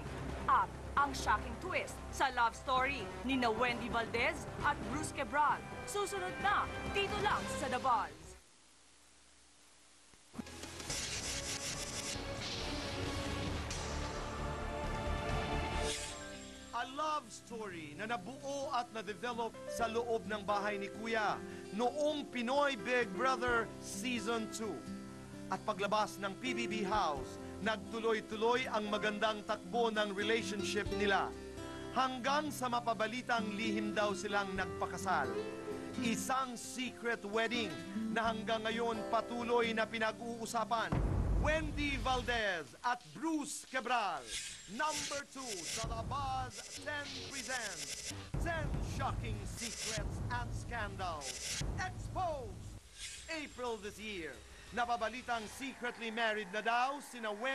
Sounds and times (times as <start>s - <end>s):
Music: 0.0s - 8.4s, 10.4s - 42.3s, 45.7s - 52.8s
Speech: 0.5s - 8.3s, 16.8s - 24.8s, 25.5s - 31.3s, 32.0s - 35.3s, 36.0s - 47.8s, 48.4s - 52.6s, 53.3s - 57.5s.